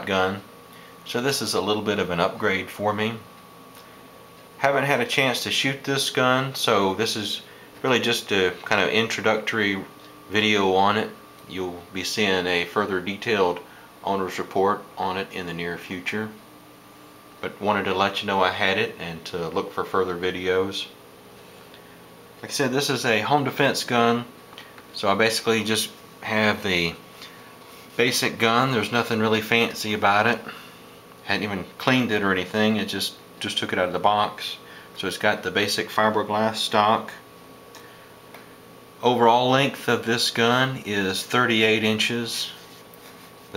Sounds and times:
Speech: 0.0 - 0.5, 1.1 - 3.3, 4.6 - 16.4, 17.4 - 21.0, 22.4 - 27.0, 28.0 - 30.6, 31.2 - 37.3, 39.0 - 42.7.

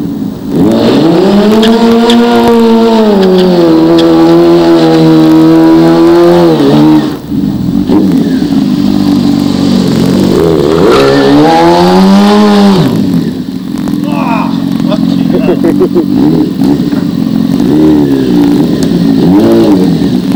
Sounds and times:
Skidding: 0.0 - 20.3
Speech: 14.0 - 15.6.

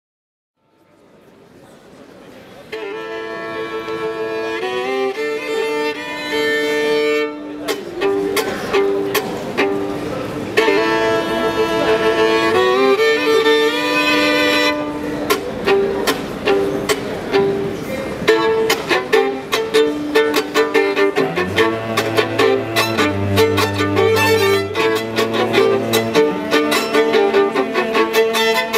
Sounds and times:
Violin, fiddle: 2.6 - 28.7.

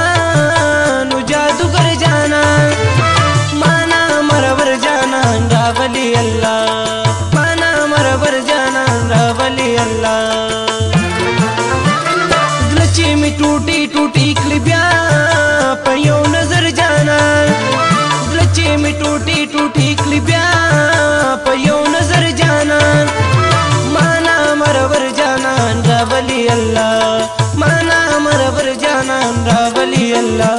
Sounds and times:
Music: 0.0 - 30.5.

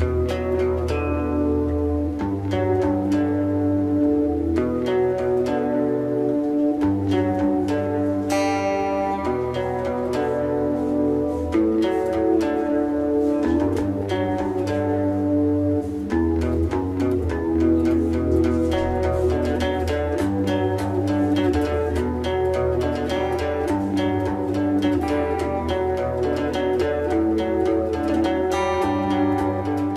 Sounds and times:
Electric guitar: 0.0 - 29.9.

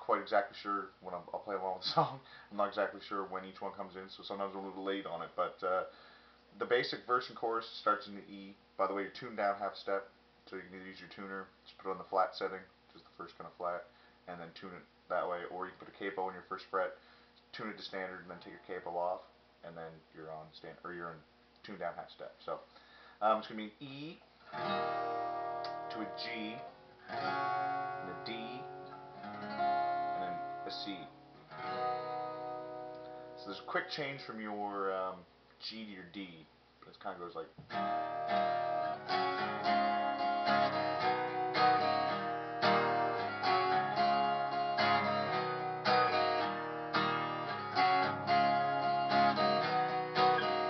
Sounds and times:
Speech: 0.0 - 5.9, 6.6 - 24.3, 25.9 - 26.7, 28.0 - 28.7, 30.1 - 31.1, 33.4 - 37.6.

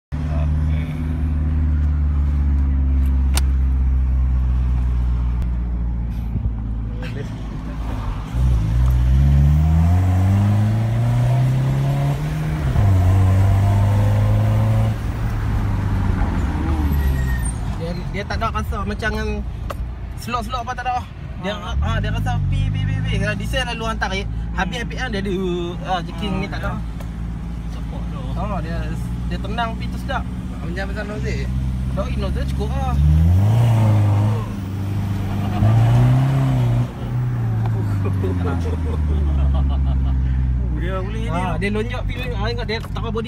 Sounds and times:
Car: 0.1 - 43.2
Outside, urban or manmade: 0.1 - 43.2.

